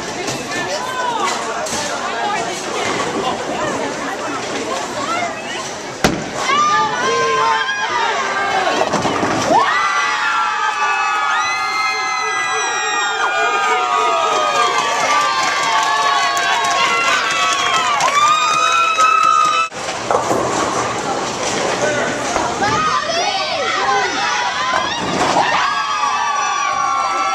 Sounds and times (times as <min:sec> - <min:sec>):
Crowd: 0:00.0 - 0:27.3
Cheering: 0:06.4 - 0:19.8, 0:22.6 - 0:27.3.